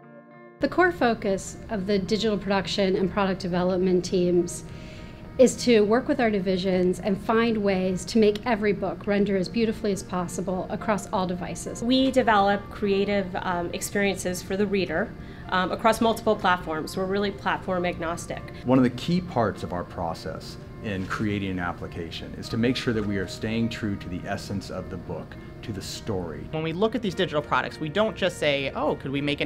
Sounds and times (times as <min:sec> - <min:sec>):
Music: 0:00.0 - 0:29.4.